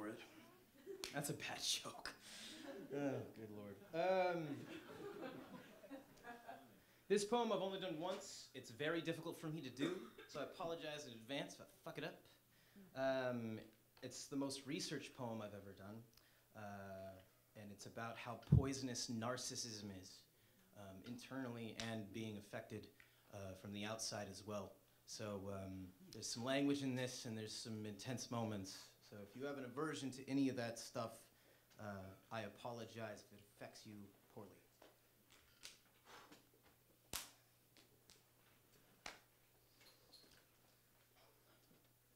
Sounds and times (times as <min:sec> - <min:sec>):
Speech: 0:00.0 - 0:02.2, 0:07.1 - 0:12.4, 0:13.0 - 0:20.2, 0:20.8 - 0:34.7.